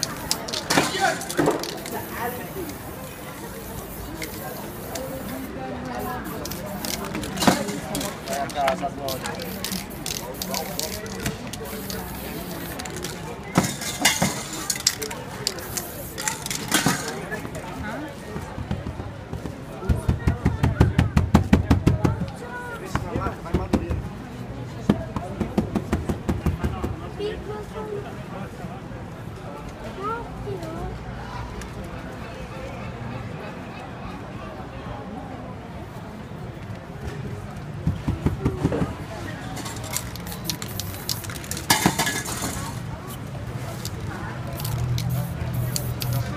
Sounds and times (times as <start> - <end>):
Speech: 0.0 - 46.3.